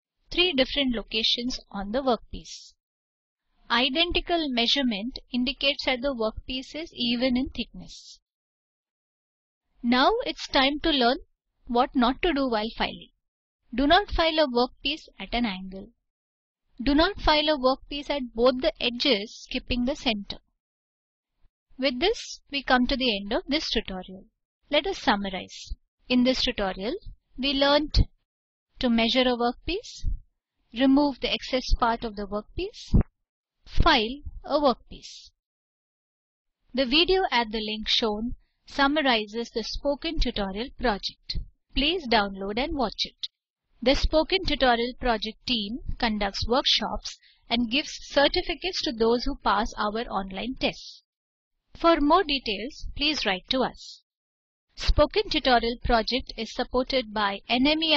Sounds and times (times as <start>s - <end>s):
Speech: 0.3s - 2.8s, 3.7s - 8.2s, 9.8s - 13.1s, 13.8s - 16.0s, 16.8s - 20.5s, 21.8s - 28.1s, 28.8s - 30.2s, 30.8s - 33.0s, 33.7s - 35.4s, 36.8s - 51.1s, 51.8s - 54.0s, 54.8s - 57.9s.